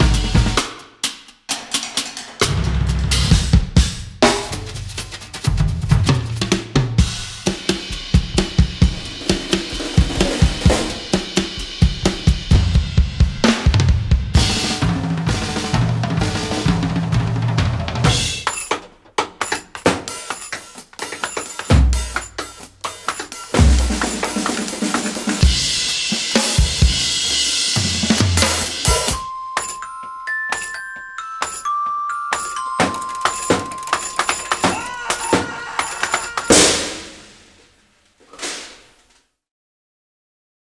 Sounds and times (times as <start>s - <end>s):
Glockenspiel: 28.9s - 36.5s
Marimba, xylophone: 29.0s - 36.6s.